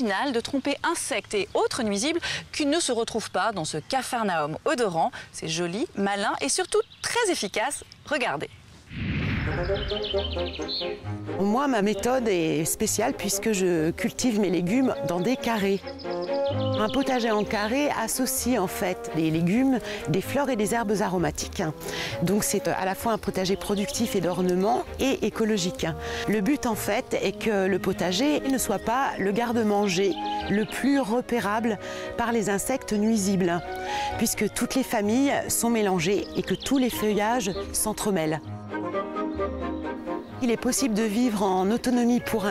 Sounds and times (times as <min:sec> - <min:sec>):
Speech: 0:00.0 - 0:08.5, 0:11.4 - 0:15.8, 0:16.8 - 0:33.6, 0:34.2 - 0:38.4, 0:40.4 - 0:42.5
Music: 0:09.3 - 0:42.5.